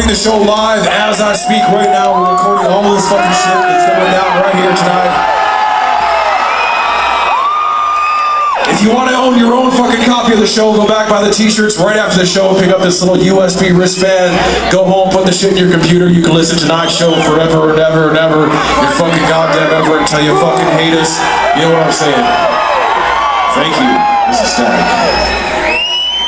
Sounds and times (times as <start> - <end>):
Speech: 0.0 - 5.2, 8.7 - 22.4, 23.5 - 24.9.